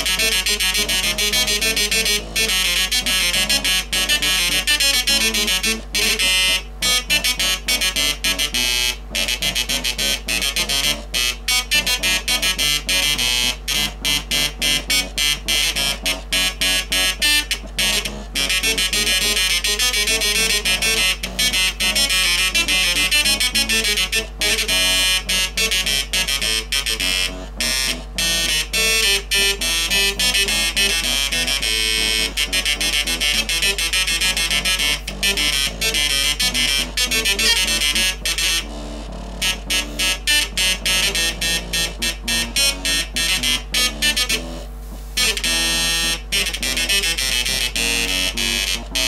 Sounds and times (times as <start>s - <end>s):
Inside, small room: 0.0s - 49.0s
Music: 0.0s - 49.0s.